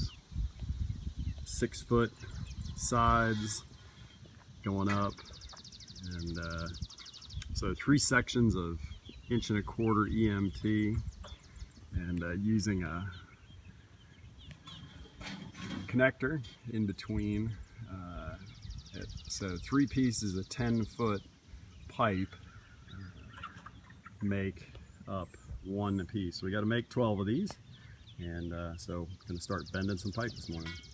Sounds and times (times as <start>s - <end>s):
Bird: 0.0s - 30.9s
Speech: 1.4s - 2.2s, 2.8s - 3.7s, 4.6s - 5.2s, 6.0s - 6.8s, 7.5s - 11.1s, 12.0s - 13.2s, 15.8s - 21.2s, 21.9s - 22.4s, 24.2s - 27.6s, 28.2s - 30.8s.